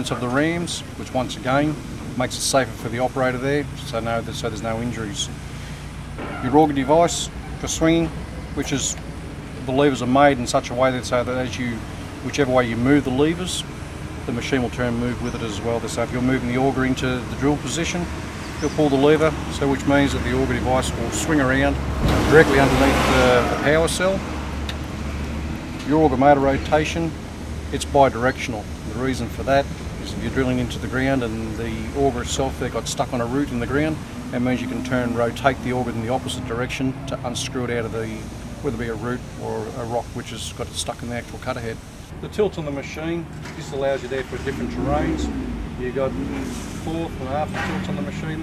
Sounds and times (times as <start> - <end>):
Speech: 0.0 - 5.4, 6.2 - 9.0, 9.6 - 13.7, 14.3 - 24.2, 25.8 - 48.4
Outside, urban or manmade: 0.0 - 48.4
Vehicle: 0.0 - 48.4.